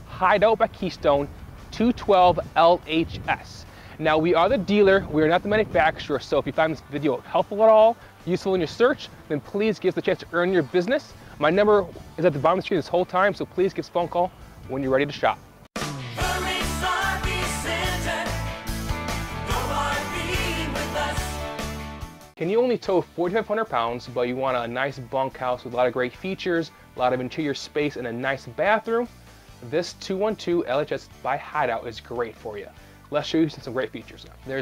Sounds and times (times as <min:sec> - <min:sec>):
Music: 0:00.0 - 0:34.6
Speech: 0:00.1 - 0:15.4, 0:22.4 - 0:34.6.